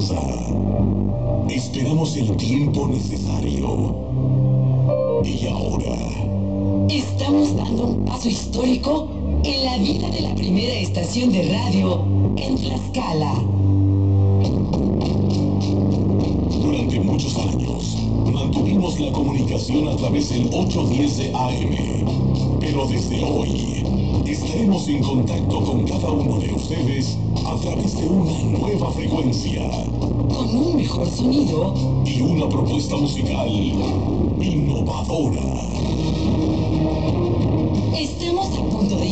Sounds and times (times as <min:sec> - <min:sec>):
Speech: 0:00.0 - 0:00.6, 0:01.5 - 0:04.0, 0:05.2 - 0:06.3, 0:06.9 - 0:13.6, 0:16.5 - 0:35.9, 0:38.0 - 0:39.1
Music: 0:00.0 - 0:39.1.